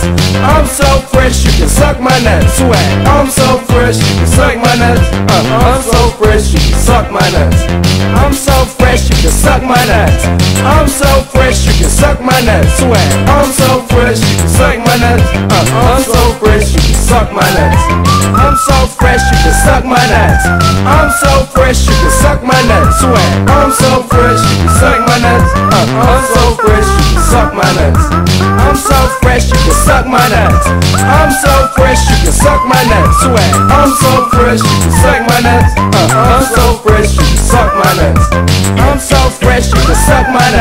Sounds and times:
Exciting music: 0.0s - 40.6s
Theme music: 15.2s - 40.6s
Video game music: 16.9s - 40.6s.

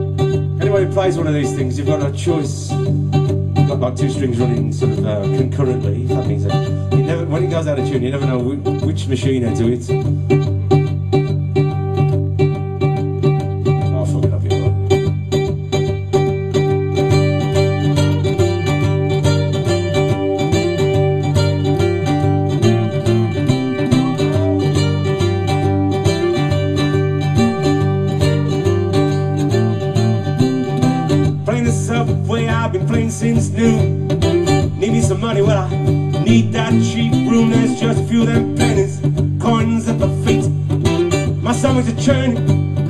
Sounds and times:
Guitar: 0.0s - 42.9s
Mandolin: 0.0s - 42.9s
Speech: 0.6s - 2.9s, 3.6s - 10.0s, 13.8s - 14.8s, 31.5s - 33.8s.

